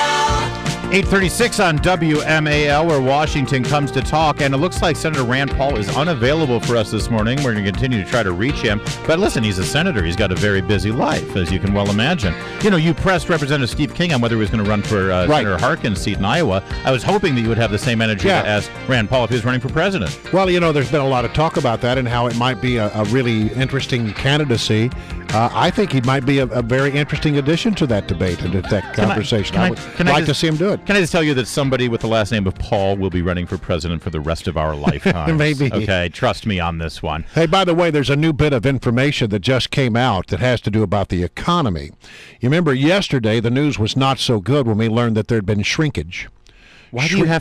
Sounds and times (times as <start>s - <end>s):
Music: 0.0s - 41.6s, 42.3s - 46.0s, 46.9s - 47.4s
Speech: 0.9s - 46.3s, 46.9s - 47.4s.